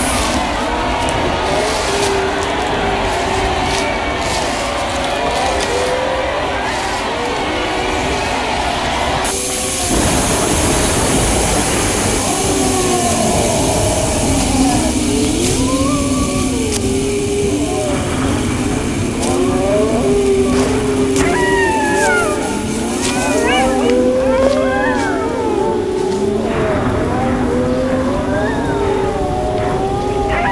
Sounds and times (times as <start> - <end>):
Inside, large room or hall: 0.0 - 30.5.